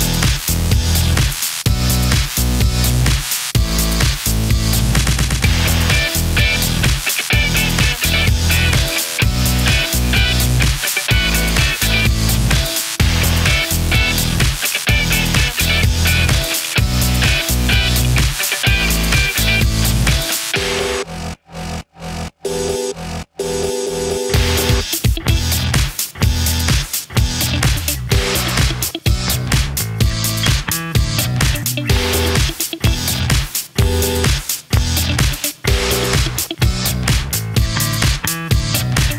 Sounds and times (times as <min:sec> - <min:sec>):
Music: 0:00.0 - 0:39.1.